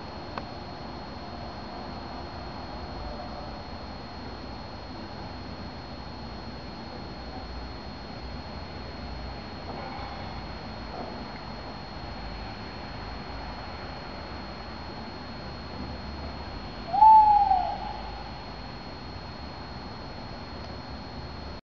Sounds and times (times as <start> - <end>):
Hoot: 16.9 - 18.1.